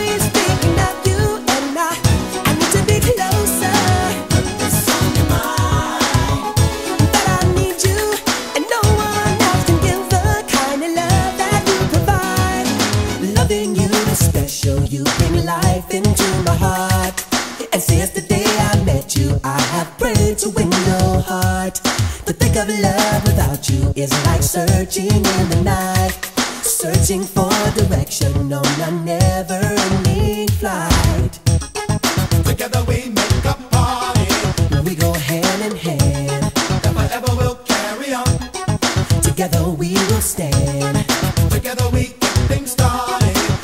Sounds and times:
Funk: 0:00.0 - 0:43.6.

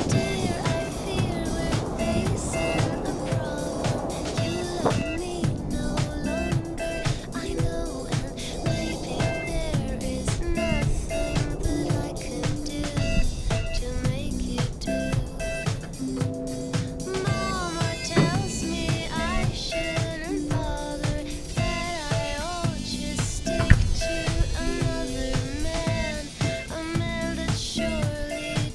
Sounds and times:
Music: 0:00.0 - 0:28.7.

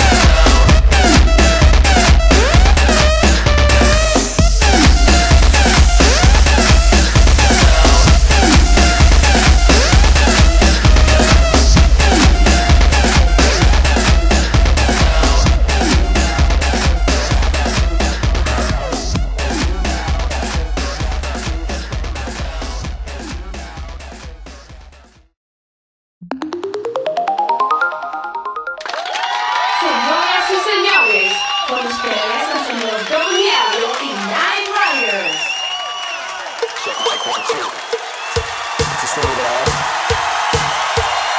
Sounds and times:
Ringtone: 0:26.2 - 0:29.0
Speech: 0:29.9 - 0:35.4.

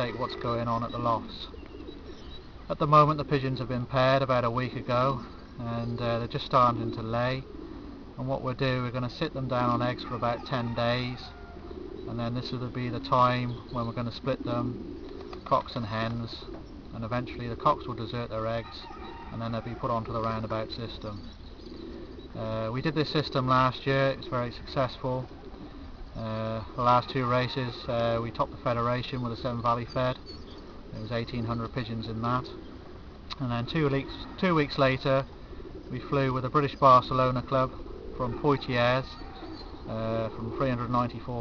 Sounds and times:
Speech: 0:00.0 - 0:01.5, 0:02.7 - 0:07.5, 0:08.2 - 0:11.4, 0:12.1 - 0:14.7, 0:15.5 - 0:21.2, 0:22.4 - 0:25.3, 0:26.2 - 0:30.2, 0:31.0 - 0:32.6, 0:33.3 - 0:35.3, 0:35.9 - 0:39.2, 0:39.9 - 0:41.4
Outside, rural or natural: 0:00.0 - 0:41.4
Pigeon, dove: 0:00.0 - 0:41.4.

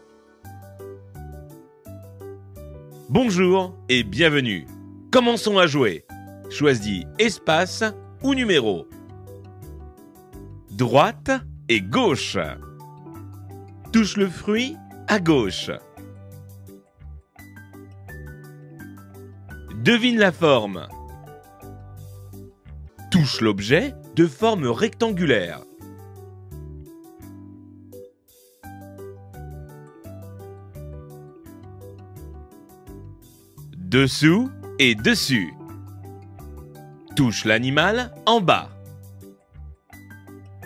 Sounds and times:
Music: 0:00.0 - 0:40.6
Speech: 0:03.1 - 0:08.9, 0:10.7 - 0:12.6, 0:13.9 - 0:15.9, 0:19.7 - 0:21.0, 0:23.1 - 0:25.7, 0:33.8 - 0:35.6, 0:37.2 - 0:38.8.

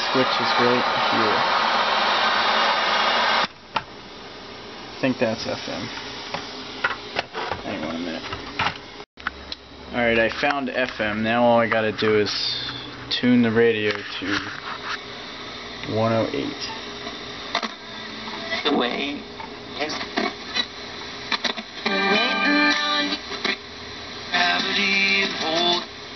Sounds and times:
Speech: 0:00.0 - 0:01.4, 0:05.0 - 0:05.9, 0:07.6 - 0:08.3, 0:09.9 - 0:14.6, 0:15.8 - 0:16.8.

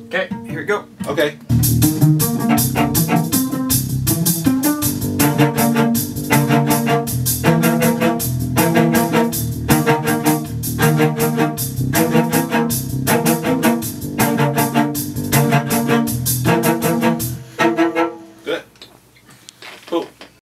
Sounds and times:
Speech: 0:00.1 - 0:01.4, 0:18.4 - 0:18.7, 0:19.9 - 0:20.2
Cello: 0:00.2 - 0:18.6.

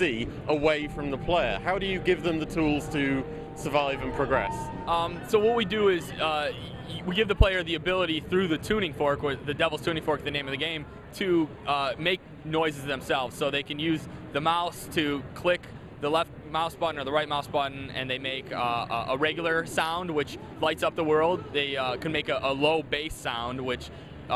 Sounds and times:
Speech: 0:00.0 - 0:24.3.

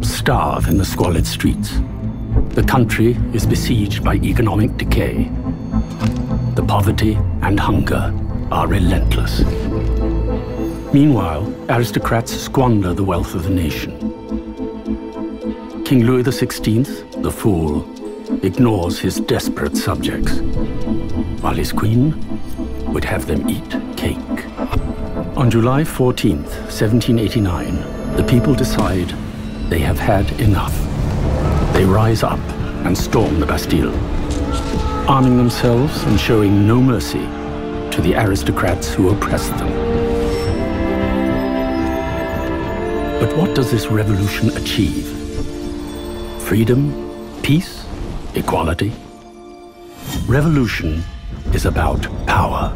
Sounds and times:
Speech: 0:00.0 - 0:01.8, 0:02.5 - 0:05.3, 0:06.6 - 0:09.6, 0:10.9 - 0:14.0, 0:15.8 - 0:20.4, 0:21.4 - 0:22.2, 0:22.8 - 0:30.9, 0:31.7 - 0:34.0, 0:35.1 - 0:37.3, 0:37.9 - 0:39.8, 0:43.2 - 0:45.2, 0:46.4 - 0:49.0, 0:50.1 - 0:52.7
Music: 0:00.0 - 0:52.7.

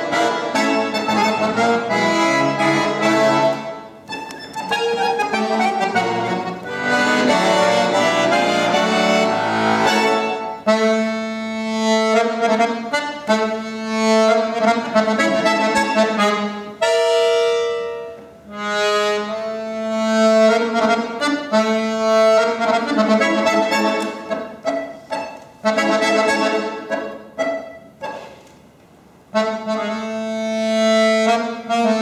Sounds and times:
Musical instrument: 0:00.0 - 0:28.5, 0:29.3 - 0:32.0.

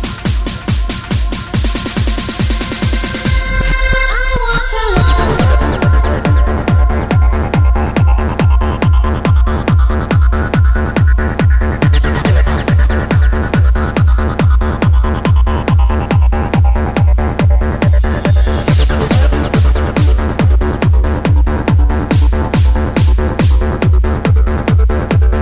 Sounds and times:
Techno: 0:00.0 - 0:25.4.

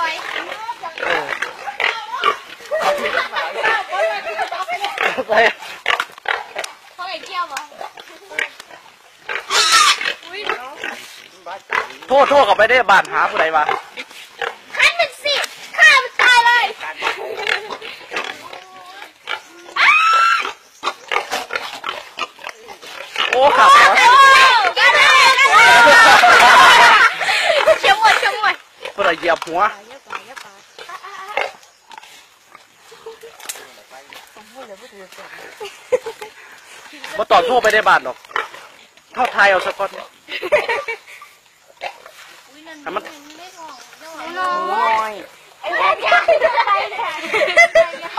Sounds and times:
Pig: 0:00.0 - 0:06.8, 0:07.6 - 0:12.4, 0:17.0 - 0:25.8, 0:30.1 - 0:34.2
Outside, rural or natural: 0:00.0 - 0:48.1.

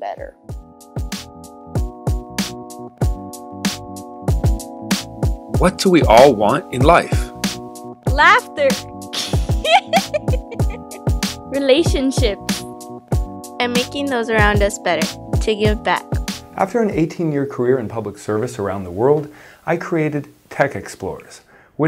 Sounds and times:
Music: 0:00.0 - 0:19.3
Speech: 0:05.6 - 0:07.3, 0:16.6 - 0:21.8.

